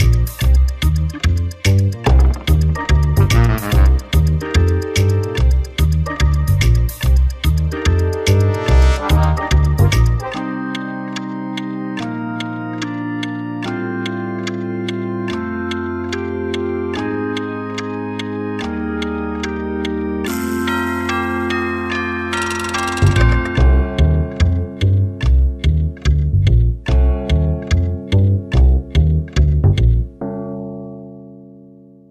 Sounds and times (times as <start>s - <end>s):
Music: 0.0s - 32.1s.